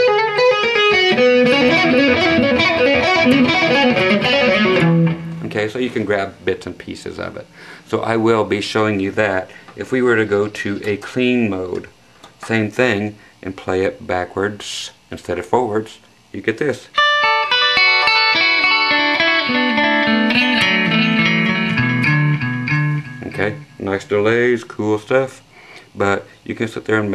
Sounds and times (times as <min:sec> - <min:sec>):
Guitar: 0:00.0 - 0:08.2, 0:16.8 - 0:25.1
Speech: 0:05.4 - 0:17.0, 0:23.2 - 0:25.4, 0:26.0 - 0:27.1.